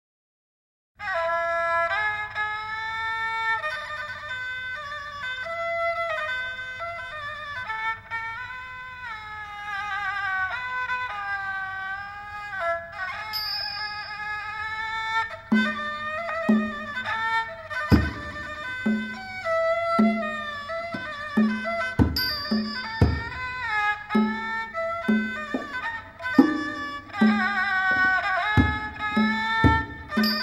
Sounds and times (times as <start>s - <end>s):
Traditional music: 1.0s - 30.4s.